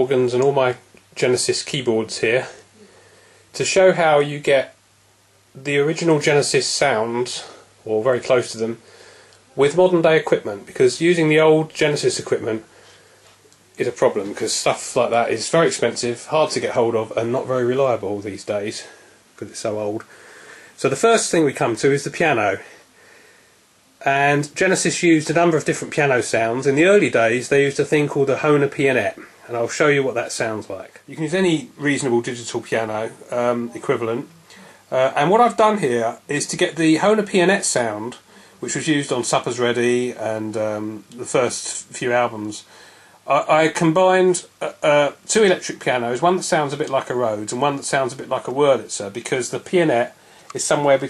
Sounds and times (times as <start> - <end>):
Speech: 0.0 - 2.7, 3.6 - 4.8, 5.6 - 8.8, 9.5 - 12.7, 13.8 - 20.1, 20.8 - 22.8, 24.0 - 42.7, 43.3 - 51.0.